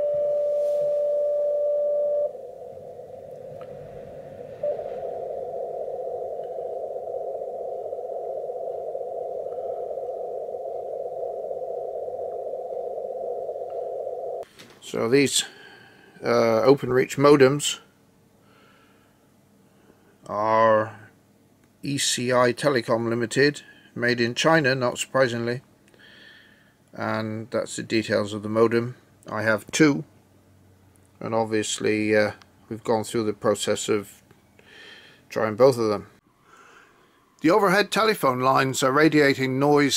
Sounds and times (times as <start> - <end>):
Speech: 14.8 - 15.5, 16.2 - 17.9, 20.3 - 21.1, 21.8 - 25.6, 27.0 - 30.1, 31.2 - 34.2, 35.3 - 36.2, 37.4 - 39.9.